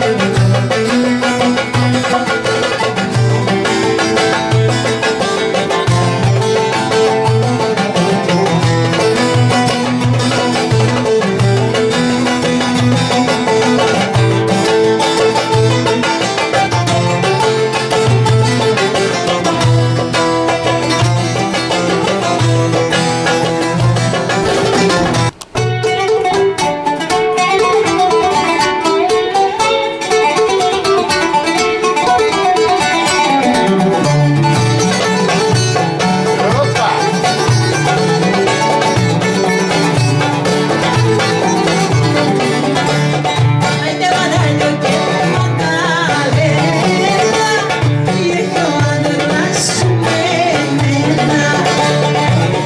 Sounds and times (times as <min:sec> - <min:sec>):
Banjo: 0:00.0 - 0:52.6.